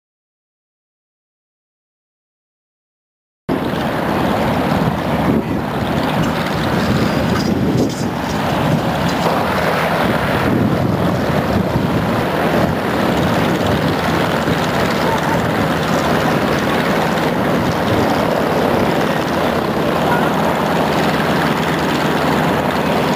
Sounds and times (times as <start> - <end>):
Outside, rural or natural: 3.5 - 23.1
Vehicle: 3.5 - 23.1.